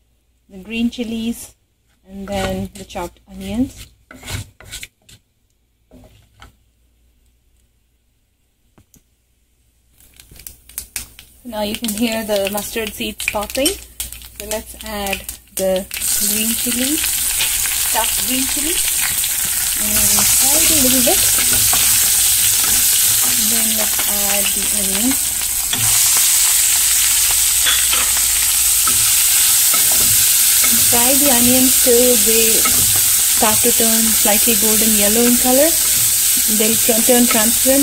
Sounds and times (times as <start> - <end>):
Frying (food): 9.9 - 37.8.